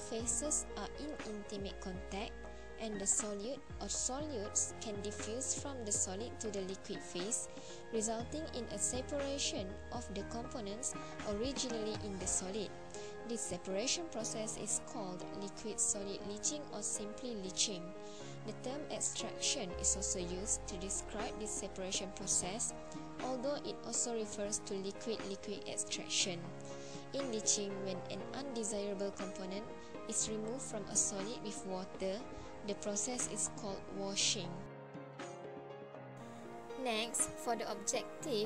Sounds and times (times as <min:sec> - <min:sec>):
Speech: 0:00.0 - 0:07.4, 0:08.0 - 0:26.5, 0:27.2 - 0:34.7, 0:36.8 - 0:38.4
Music: 0:00.0 - 0:38.4.